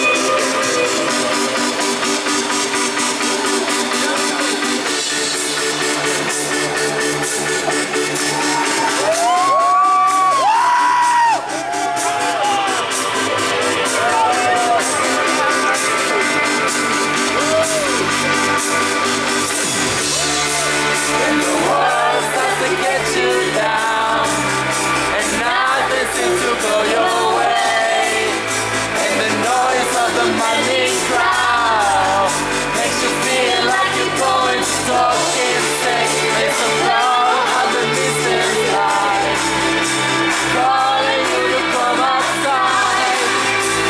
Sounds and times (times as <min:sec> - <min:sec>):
Music: 0:00.0 - 0:43.9.